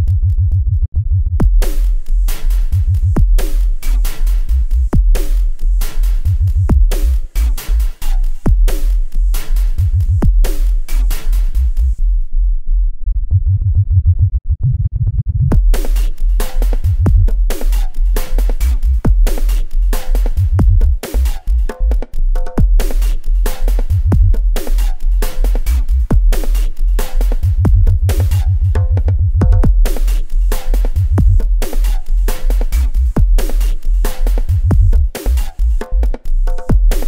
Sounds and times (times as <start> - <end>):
Dubstep: 1.5 - 12.0, 15.5 - 37.0.